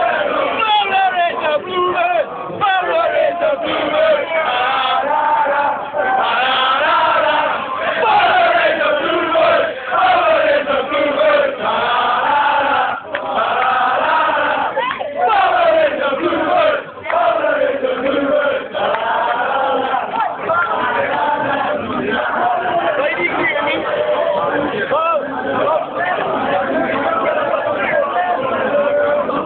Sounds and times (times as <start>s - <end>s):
Speech: 0.0s - 4.6s, 22.6s - 29.4s.